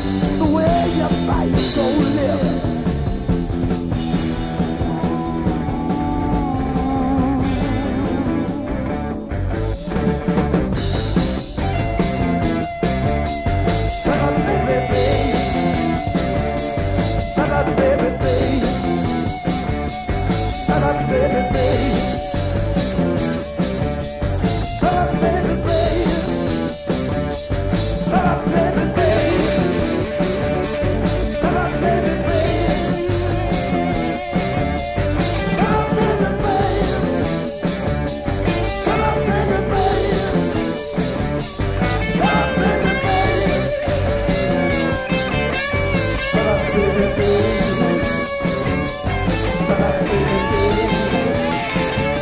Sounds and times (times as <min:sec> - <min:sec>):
Blues: 0:00.0 - 0:52.2.